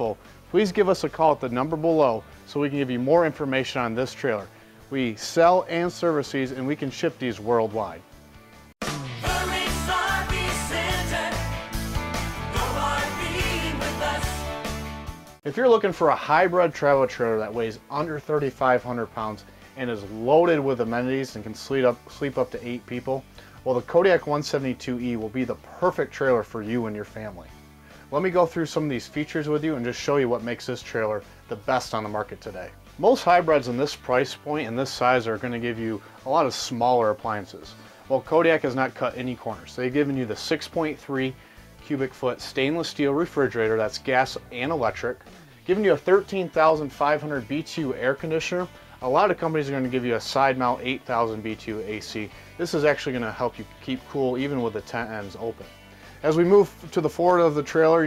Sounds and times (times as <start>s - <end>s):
Speech: 0.0s - 8.0s, 15.5s - 27.5s, 28.1s - 58.0s
Music: 0.0s - 58.0s.